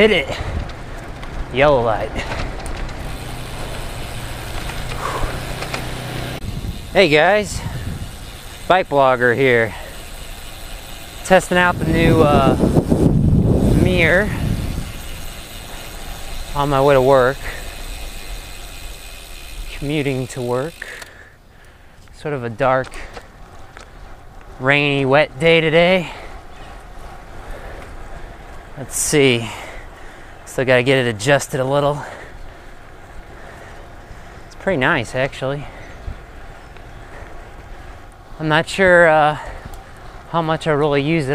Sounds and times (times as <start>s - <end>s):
Speech: 0.0s - 0.4s, 1.5s - 2.2s, 7.0s - 7.6s, 8.7s - 9.8s, 16.6s - 17.4s, 22.2s - 23.0s, 24.6s - 26.2s, 28.8s - 29.7s, 30.5s - 32.2s, 34.6s - 35.8s, 38.4s - 39.5s, 40.3s - 41.3s
Vehicle: 0.0s - 41.3s.